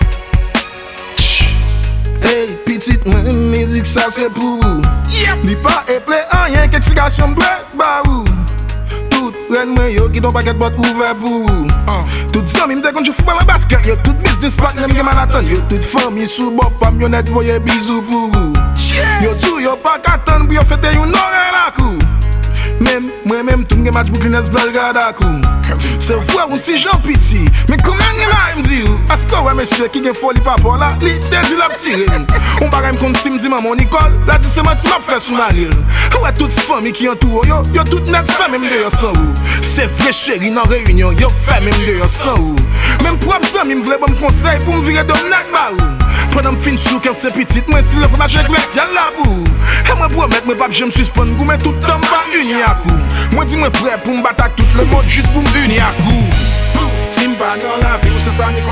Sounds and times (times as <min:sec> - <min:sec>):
Rhythm and blues: 0:00.0 - 0:58.7.